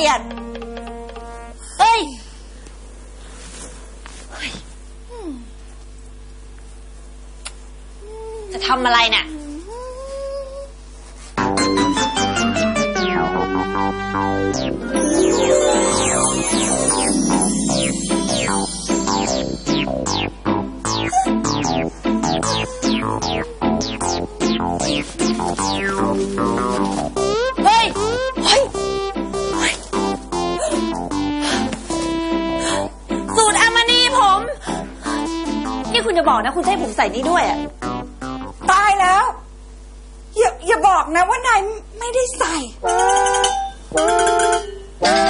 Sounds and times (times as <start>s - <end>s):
Music: 0.0s - 1.7s, 11.4s - 38.9s, 42.9s - 45.2s.